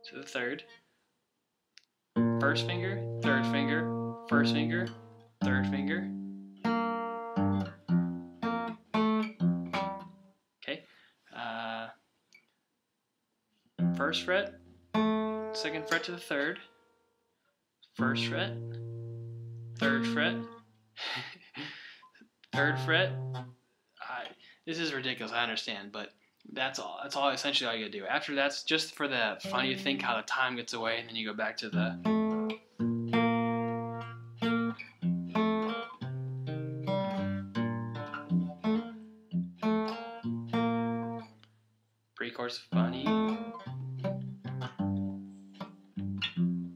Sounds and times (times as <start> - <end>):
Tapping (guitar technique): 13.8 - 16.6, 18.2 - 20.6, 22.5 - 23.5, 29.4 - 30.1, 31.8 - 41.3, 42.8 - 46.7.